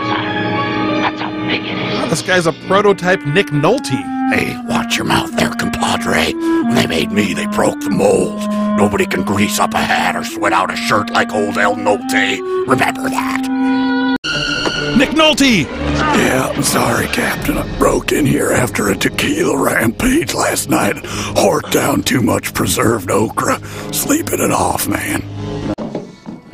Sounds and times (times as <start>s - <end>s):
Music: 0.0s - 26.5s
Speech: 2.0s - 13.5s, 15.0s - 25.2s.